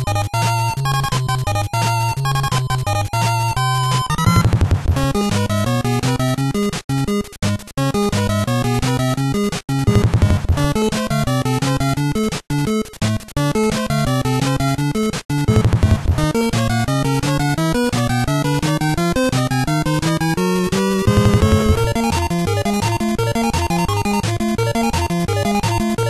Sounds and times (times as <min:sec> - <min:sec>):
Music: 0:00.0 - 0:26.1.